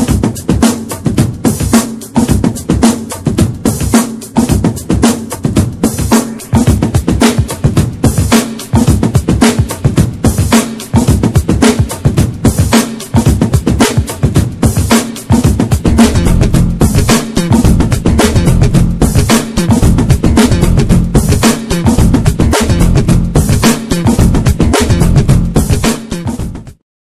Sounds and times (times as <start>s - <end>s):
Music: 0.0s - 26.8s.